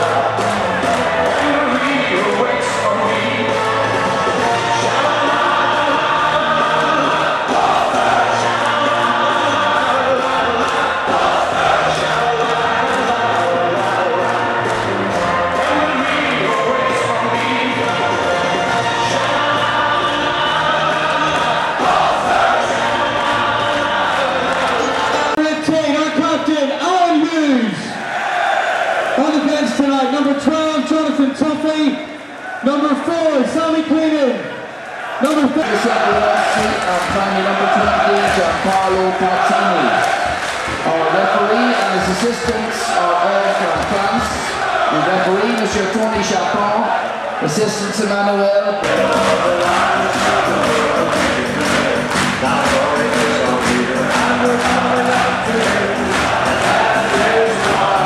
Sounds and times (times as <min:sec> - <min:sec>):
Male singing: 0:00.0 - 0:25.4, 0:35.5 - 0:40.0, 0:48.8 - 0:58.0
Music: 0:00.0 - 0:26.6, 0:35.5 - 0:45.0, 0:48.8 - 0:58.0.